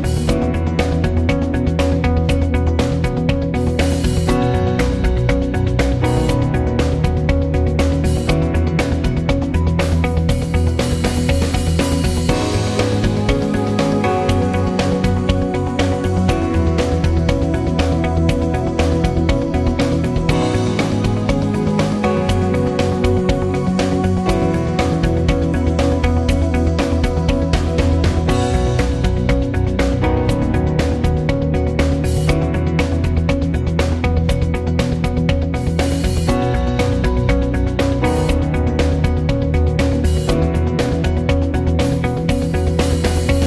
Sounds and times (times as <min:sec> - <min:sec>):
Music: 0:00.0 - 0:43.4.